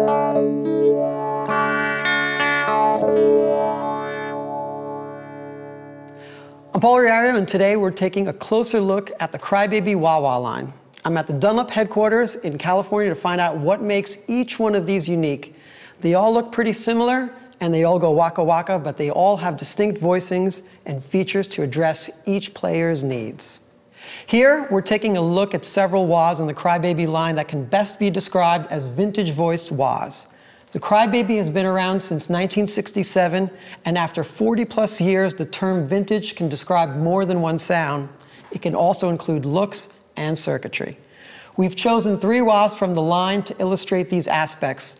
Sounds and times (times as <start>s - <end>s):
Speech: 6.7s - 23.6s, 24.3s - 41.0s, 41.6s - 44.9s.